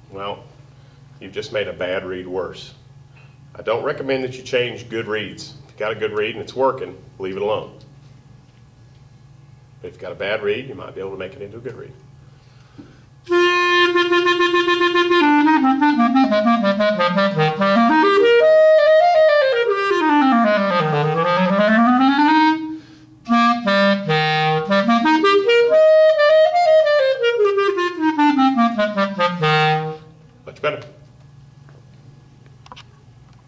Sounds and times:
Inside, small room: 0.0 - 33.4
Speech: 0.1 - 0.5, 1.2 - 2.8, 3.6 - 7.9, 9.8 - 12.0, 30.4 - 31.0
Clarinet: 13.3 - 30.2.

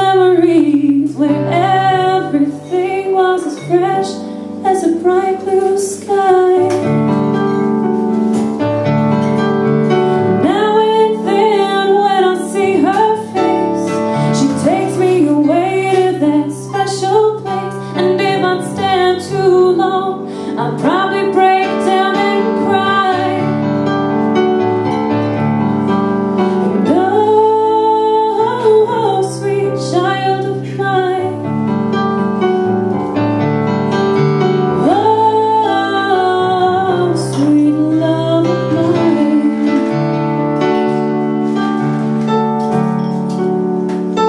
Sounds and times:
Musical instrument: 0.0 - 44.2.

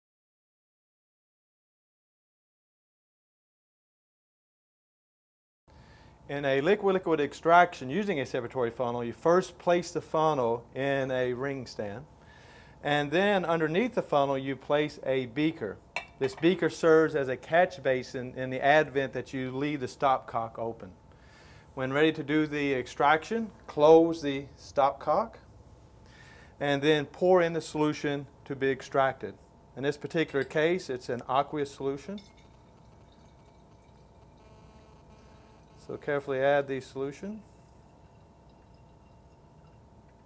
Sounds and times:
Speech: 6.3 - 12.1, 12.8 - 21.0, 21.8 - 25.5, 26.6 - 32.2, 35.8 - 37.5.

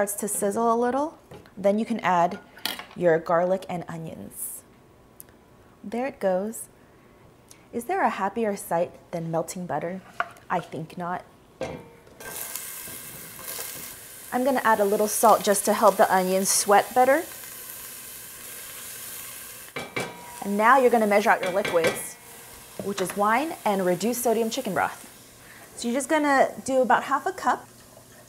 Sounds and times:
Speech: 0.0 - 2.4, 5.8 - 6.7, 7.8 - 11.3, 20.4 - 22.1, 22.8 - 25.0, 25.8 - 27.7
Frying (food): 12.2 - 28.2.

